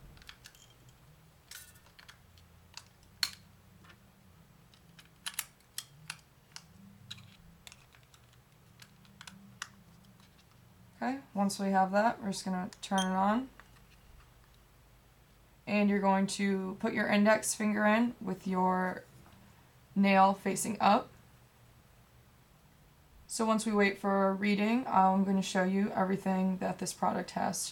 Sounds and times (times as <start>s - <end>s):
Speech: 11.0s - 13.5s, 15.7s - 19.1s, 20.0s - 21.1s, 23.3s - 27.7s.